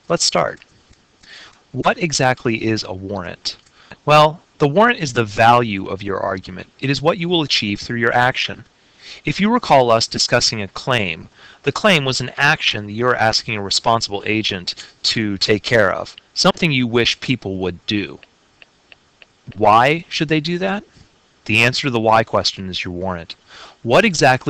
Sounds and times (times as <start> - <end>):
Speech: 0.1 - 0.6, 1.3 - 18.2, 19.5 - 20.9, 21.5 - 24.4.